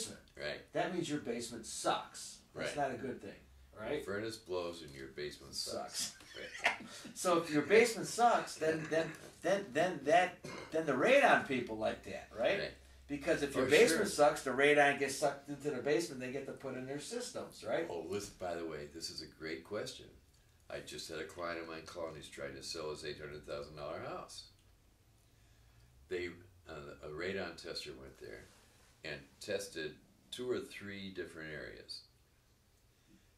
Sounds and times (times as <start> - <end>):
Speech: 0.0 - 6.5, 7.1 - 24.6, 26.1 - 32.1
Inside, small room: 0.0 - 33.3.